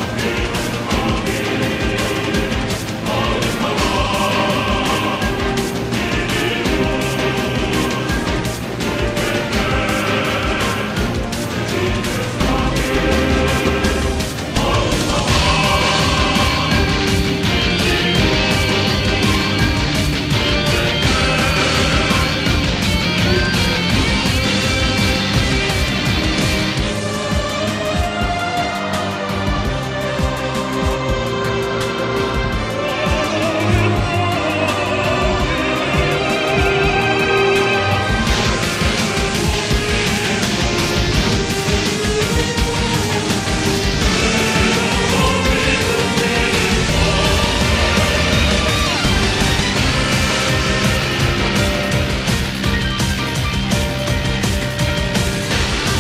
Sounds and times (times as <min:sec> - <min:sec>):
Music: 0:00.0 - 0:56.0.